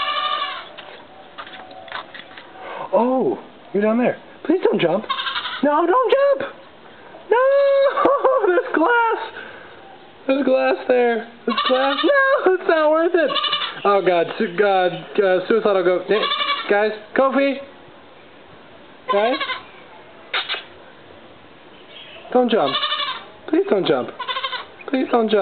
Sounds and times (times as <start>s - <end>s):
Speech: 10.3s - 17.7s, 23.5s - 24.2s, 24.9s - 25.4s.